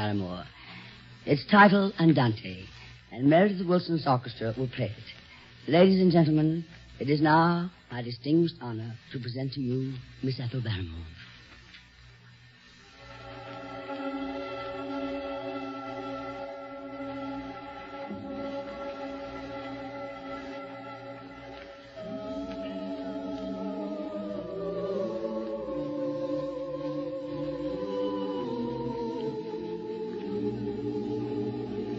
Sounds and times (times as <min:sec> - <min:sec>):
Speech: 0:00.0 - 0:00.6, 0:01.3 - 0:11.2.